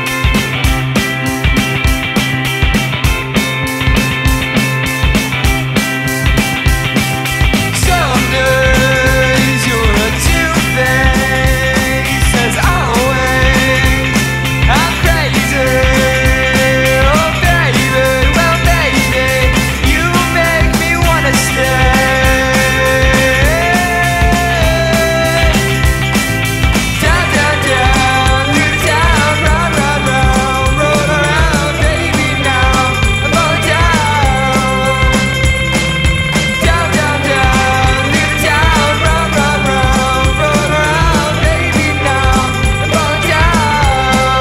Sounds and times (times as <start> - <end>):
Music: 0.0 - 44.4.